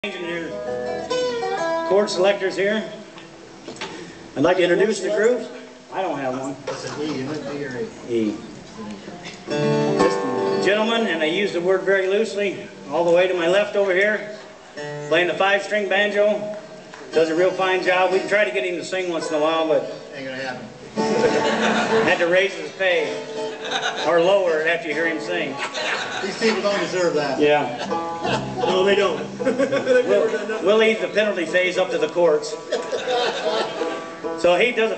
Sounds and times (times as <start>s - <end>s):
Male speech, man speaking: 0.0s - 0.6s, 1.9s - 3.0s, 4.4s - 9.2s, 10.0s - 14.4s, 15.1s - 16.5s, 17.1s - 20.7s, 22.0s - 23.2s, 24.0s - 25.6s, 26.2s - 27.8s, 28.6s - 29.3s, 29.9s - 32.6s, 34.4s - 34.9s
Bluegrass: 0.0s - 34.9s
Guitar: 0.0s - 34.9s
Banjo: 9.5s - 10.8s, 20.9s - 34.9s.